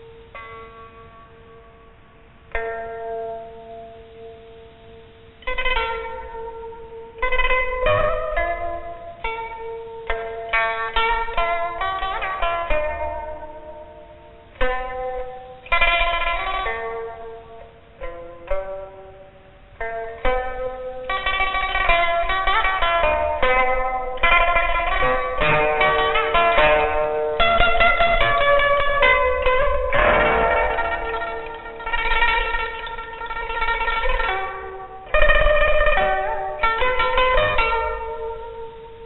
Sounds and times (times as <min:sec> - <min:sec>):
Music: 0:00.0 - 0:39.0.